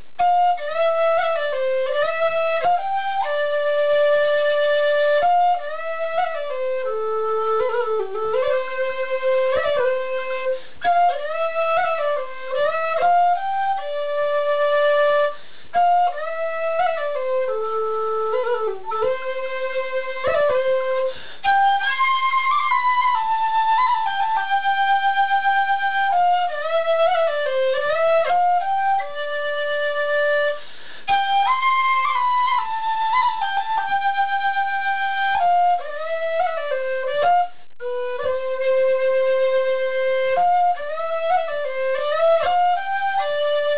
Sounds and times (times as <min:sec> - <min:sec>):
Flute: 0:00.0 - 0:43.7.